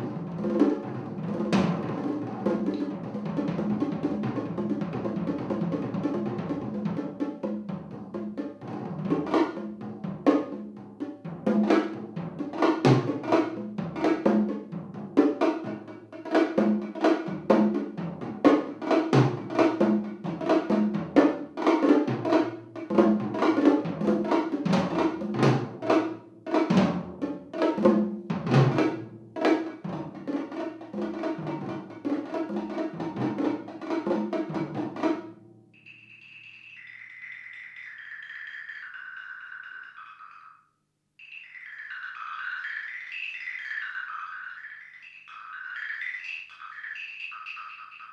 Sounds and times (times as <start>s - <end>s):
Drum kit: 0.0s - 35.4s
Drum: 0.0s - 36.5s.